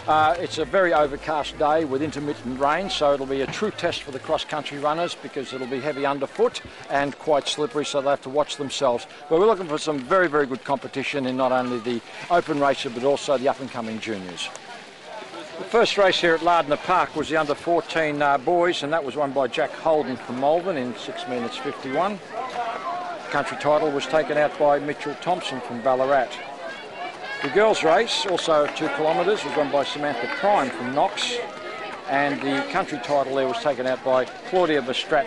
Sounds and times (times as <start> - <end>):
Speech: 0.0 - 26.4, 27.4 - 31.5, 32.1 - 35.2
Run: 0.0 - 35.2.